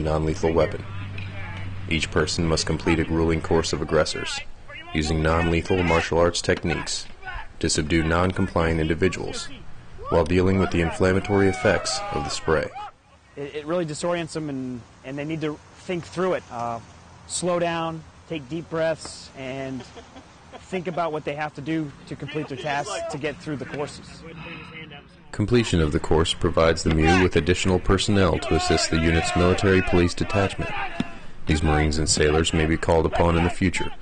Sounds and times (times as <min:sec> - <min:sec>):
Speech: 0:00.0 - 0:12.8, 0:20.7 - 0:30.9, 0:31.5 - 0:34.0.